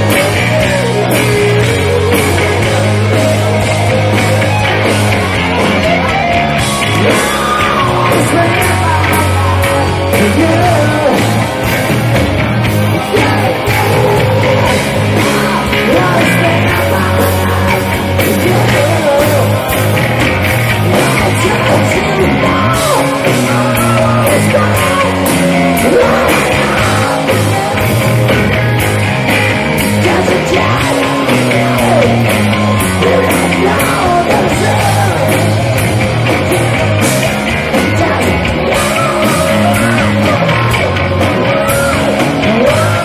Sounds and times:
Guitar: 0:00.0 - 0:43.0
Rock and roll: 0:00.0 - 0:43.0
Singing: 0:13.0 - 0:20.0, 0:20.8 - 0:28.3, 0:29.8 - 0:35.8, 0:37.8 - 0:43.0.

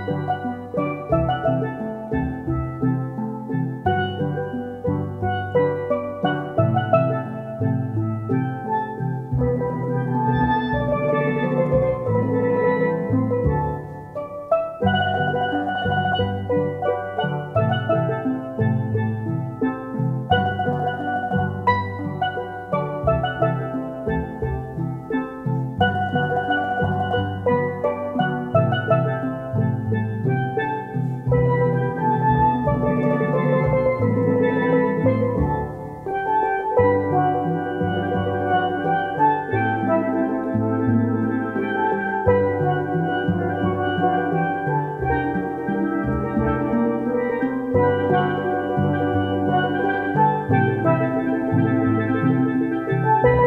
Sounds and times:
Music: 0:00.0 - 0:53.4.

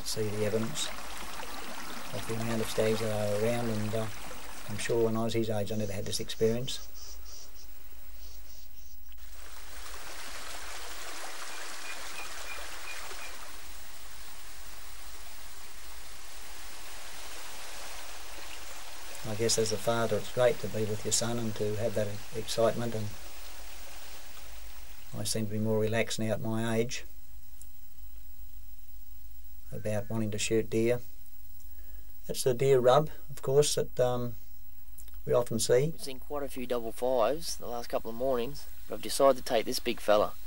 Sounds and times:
Speech: 0:00.0 - 0:00.9, 0:02.2 - 0:04.1, 0:04.7 - 0:06.8, 0:19.3 - 0:23.1, 0:25.2 - 0:27.1, 0:29.7 - 0:31.1, 0:32.3 - 0:34.4, 0:35.3 - 0:40.4.

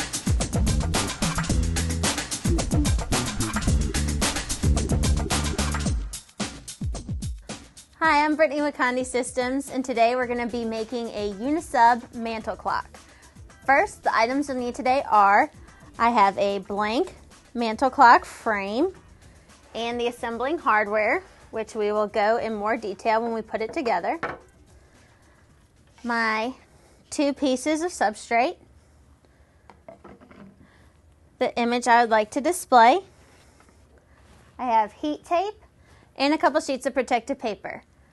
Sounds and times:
Speech: 0:08.0 - 0:12.9, 0:13.7 - 0:19.0, 0:19.8 - 0:24.2, 0:26.0 - 0:28.6, 0:31.4 - 0:33.1, 0:34.6 - 0:35.6, 0:36.2 - 0:37.9.

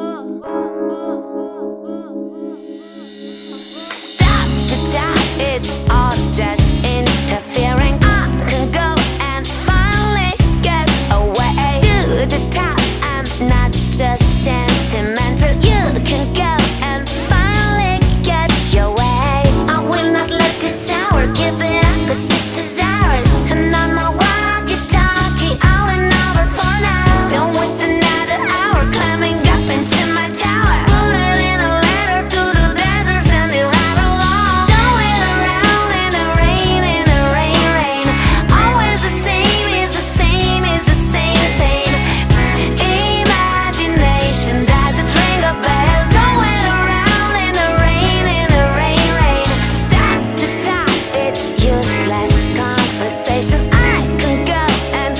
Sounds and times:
Music: 0:00.0 - 0:55.1.

